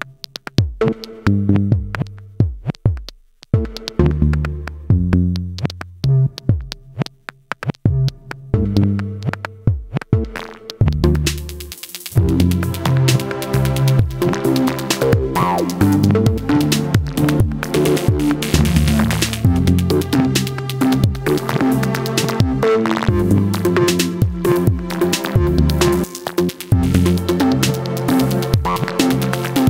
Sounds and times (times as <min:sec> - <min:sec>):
Synthesizer: 0:10.2 - 0:29.7.